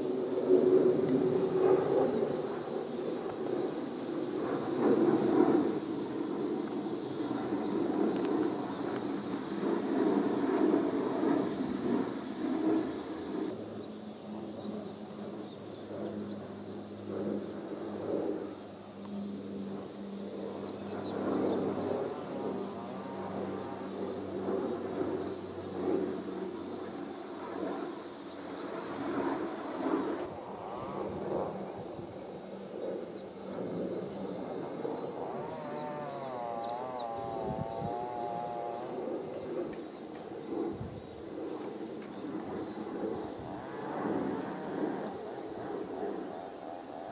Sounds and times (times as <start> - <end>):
Fixed-wing aircraft, airplane: 0.0 - 47.1.